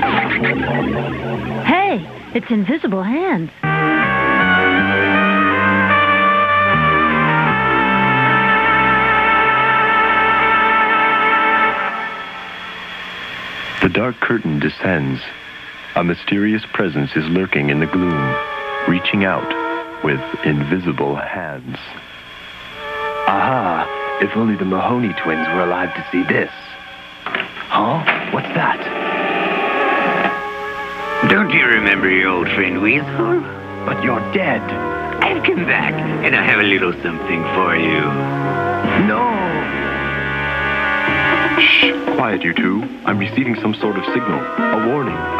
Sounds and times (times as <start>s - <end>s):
Music: 0.0s - 45.4s
Speech: 1.6s - 3.5s, 13.8s - 15.4s, 16.0s - 22.0s, 23.3s - 26.8s, 27.7s - 28.9s, 31.2s - 38.2s, 38.9s - 39.7s, 41.6s - 45.2s.